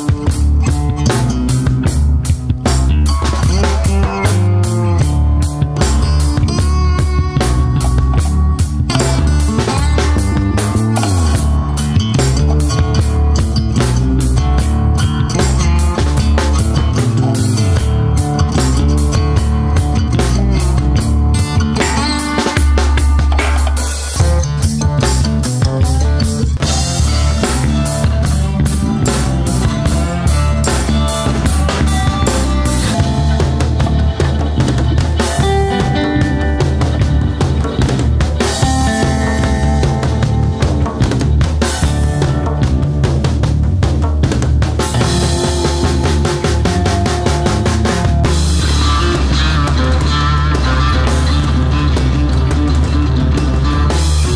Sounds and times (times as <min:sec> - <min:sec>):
Music: 0:00.0 - 0:54.3.